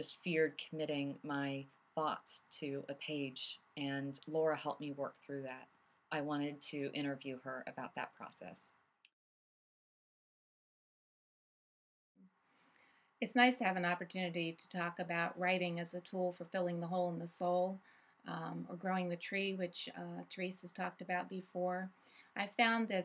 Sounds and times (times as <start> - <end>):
Speech: 0.0 - 5.6, 6.2 - 8.7, 13.2 - 23.0.